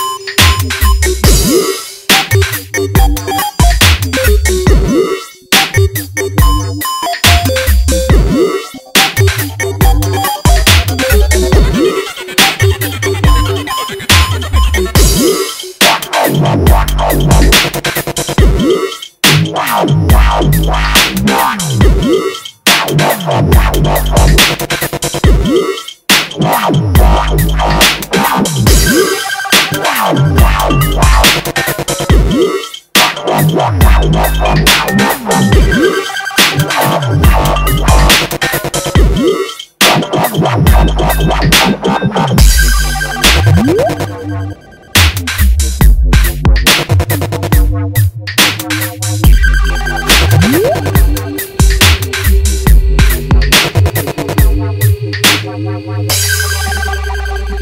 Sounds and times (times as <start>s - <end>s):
Dubstep: 0.0s - 57.6s.